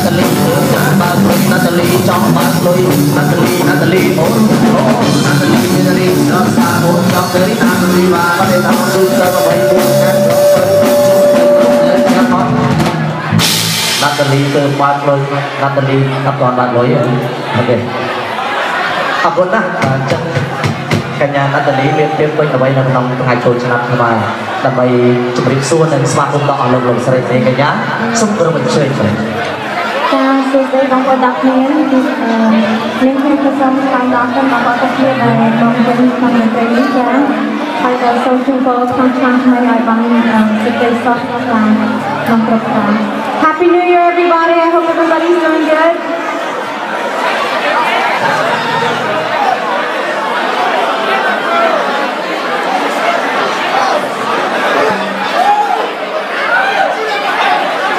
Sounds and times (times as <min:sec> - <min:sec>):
Speech: 0:00.0 - 0:10.8, 0:14.0 - 0:18.0, 0:19.2 - 0:20.5, 0:21.2 - 0:29.4, 0:30.1 - 0:46.1.